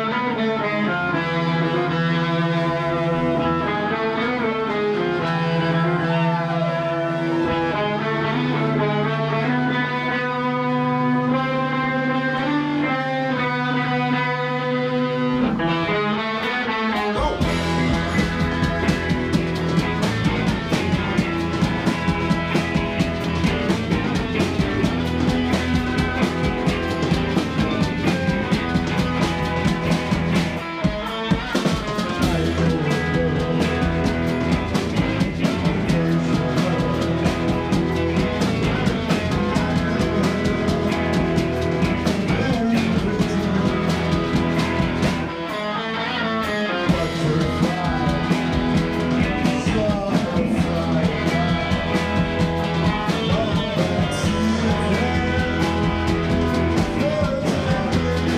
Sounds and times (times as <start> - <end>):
Music: 0.0 - 58.3.